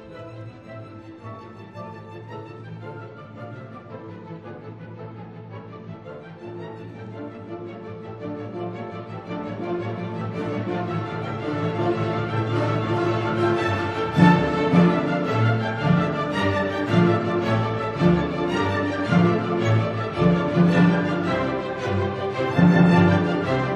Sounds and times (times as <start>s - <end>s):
Music: 0.0s - 23.7s.